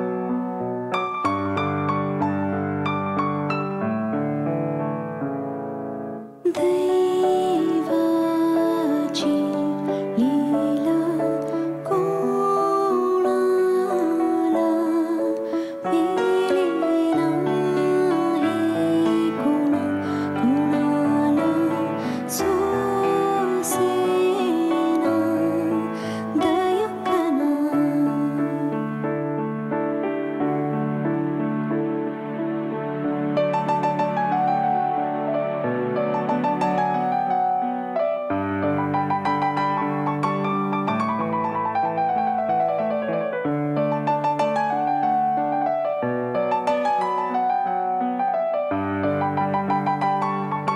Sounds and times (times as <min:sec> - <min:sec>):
New-age music: 0:00.0 - 0:50.7
Sad music: 0:00.0 - 0:50.7.